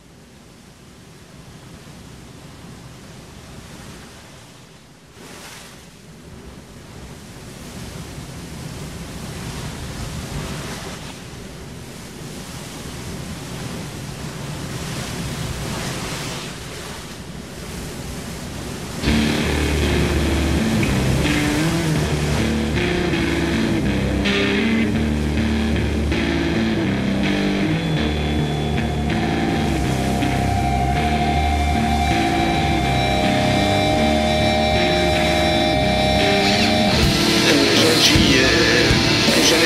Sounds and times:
Music: 19.0s - 39.6s.

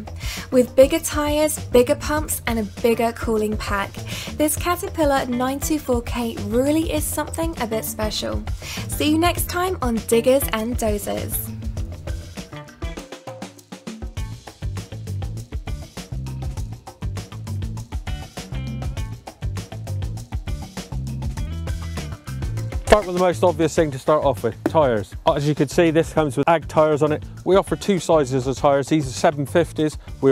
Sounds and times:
Music: 0.0s - 30.3s
Speech: 0.6s - 8.4s, 9.0s - 11.5s, 22.9s - 30.3s.

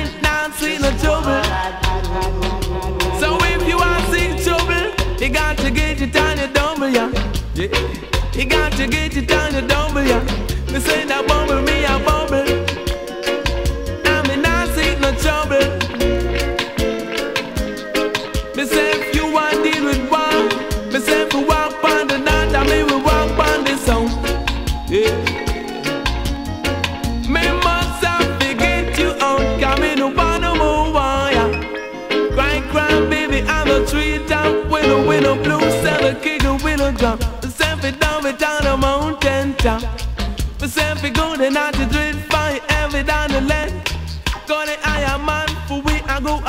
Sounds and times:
Reggae: 0.0s - 46.4s.

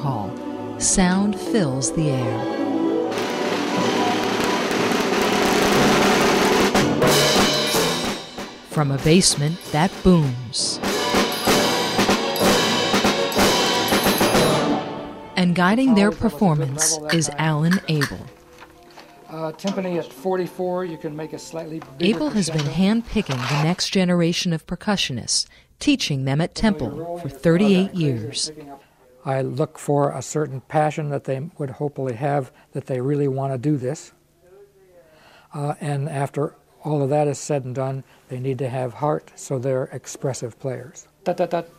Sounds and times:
Speech: 8.7s - 10.8s, 15.4s - 18.3s, 19.4s - 35.0s, 35.6s - 41.7s.

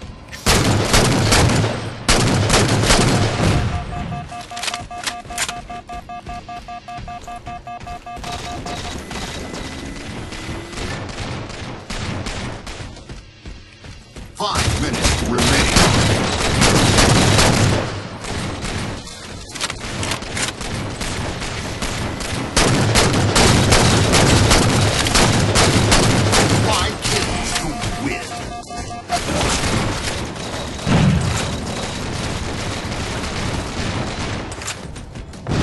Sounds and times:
Fusillade: 0.4s - 6.4s, 8.1s - 13.1s, 14.5s - 35.6s
Speech: 14.4s - 15.8s.

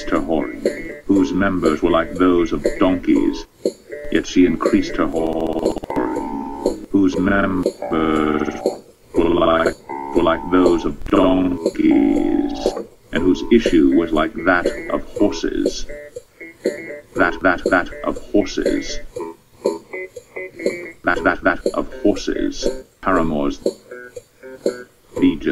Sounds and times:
Speech: 0.0s - 3.5s, 4.1s - 5.8s, 6.9s - 8.6s, 9.2s - 15.9s, 17.2s - 19.1s, 21.1s - 23.7s, 25.2s - 25.5s
Music: 0.0s - 25.5s.

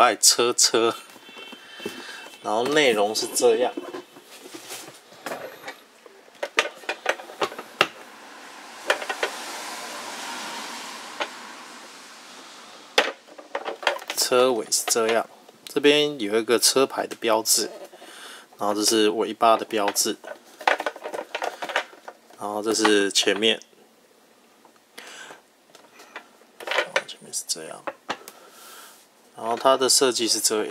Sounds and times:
Speech: 0.0s - 1.0s, 2.4s - 3.8s, 14.1s - 17.8s, 18.6s - 20.2s, 22.4s - 23.7s, 26.8s - 27.9s, 29.4s - 30.7s.

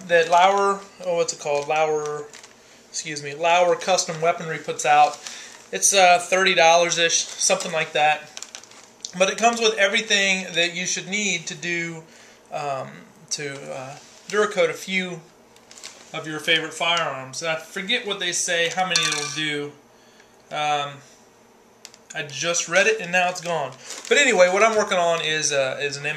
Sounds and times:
Speech: 0.0s - 2.4s, 3.0s - 8.4s, 9.1s - 15.3s, 16.1s - 19.8s, 20.5s - 21.1s, 22.1s - 26.1s.

